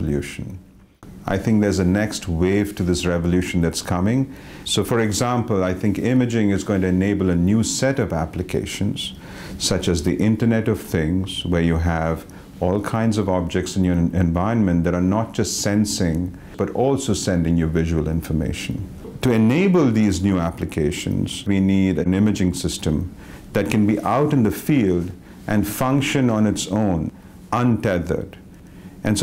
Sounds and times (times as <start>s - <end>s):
Speech: 0.0s - 0.6s, 1.2s - 28.4s.